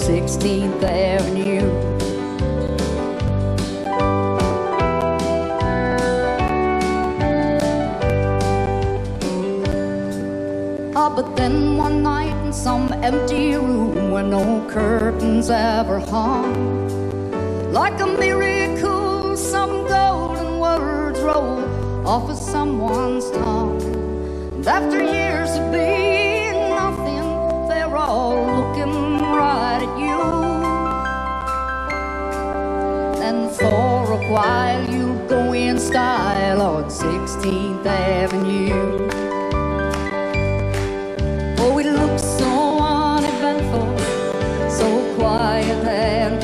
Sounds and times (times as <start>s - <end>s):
Christmas music: 0.0s - 46.4s.